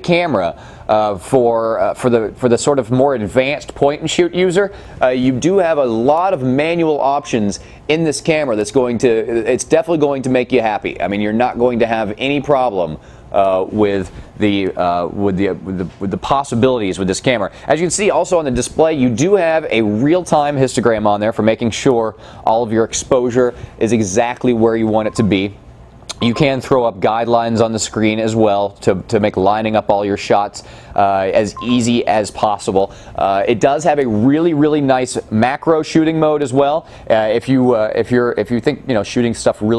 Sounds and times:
Speech: 0.0 - 39.7.

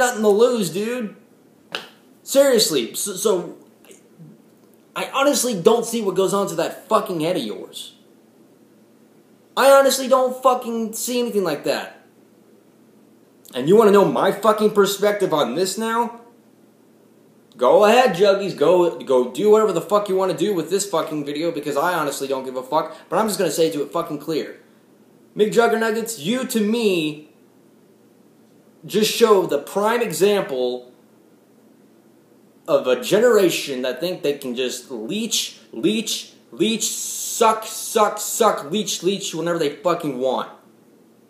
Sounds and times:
Speech: 0.0 - 1.2, 2.2 - 3.6, 5.0 - 8.0, 9.6 - 12.1, 13.5 - 16.3, 17.6 - 24.6, 25.4 - 27.3, 28.8 - 31.0, 32.7 - 40.6.

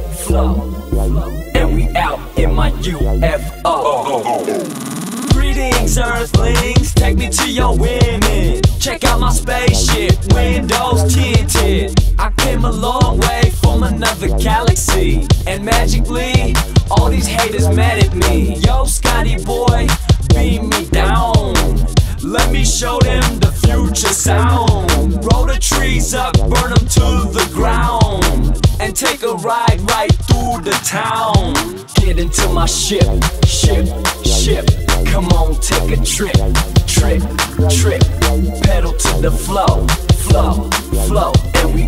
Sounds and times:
Rhythm and blues: 0.0 - 41.8.

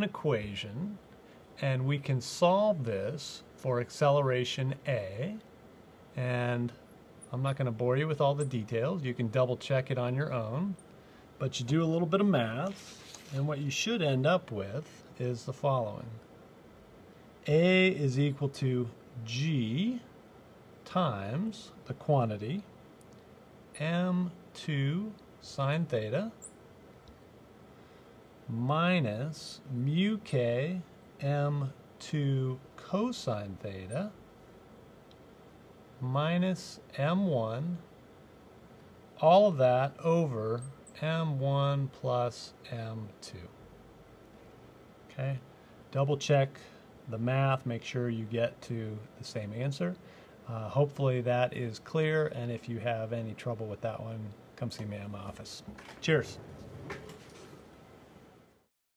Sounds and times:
Speech: 0.0 - 1.0, 1.6 - 5.5, 6.2 - 10.8, 11.4 - 16.2, 17.4 - 20.1, 20.8 - 22.7, 23.8 - 26.4, 28.5 - 34.2, 36.0 - 37.9, 39.2 - 43.6, 45.1 - 56.4.

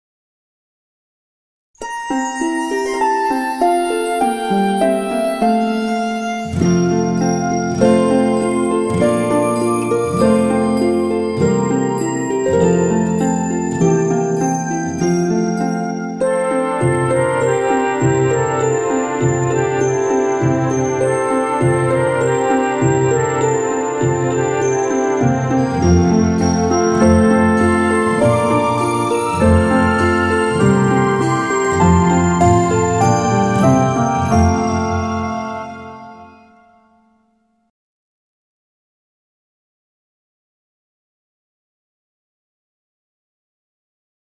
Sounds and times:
Music: 1.8 - 37.7.

